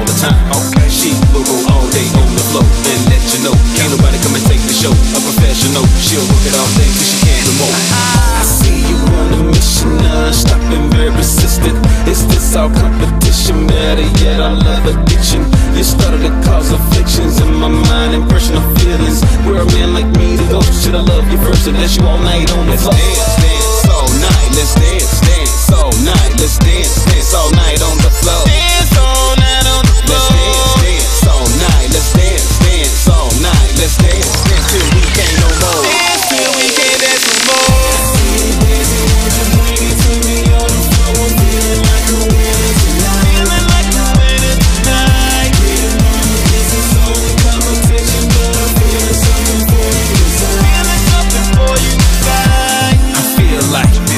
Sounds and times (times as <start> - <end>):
Music: 0.0 - 54.1.